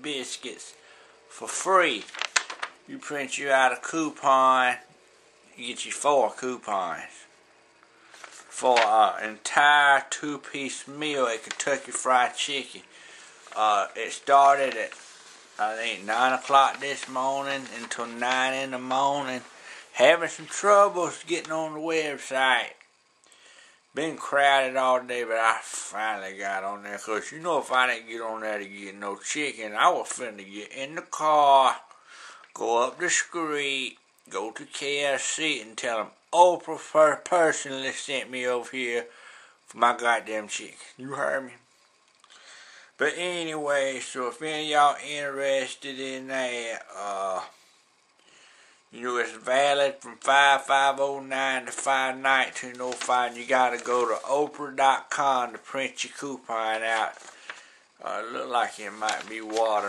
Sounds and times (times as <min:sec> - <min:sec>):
Speech: 0:00.0 - 0:02.2, 0:02.9 - 0:04.9, 0:05.6 - 0:07.3, 0:08.5 - 0:12.9, 0:13.6 - 0:15.0, 0:15.6 - 0:22.9, 0:23.9 - 0:31.9, 0:32.6 - 0:39.1, 0:39.7 - 0:41.6, 0:43.0 - 0:47.6, 0:48.9 - 0:57.3, 0:58.0 - 0:59.8.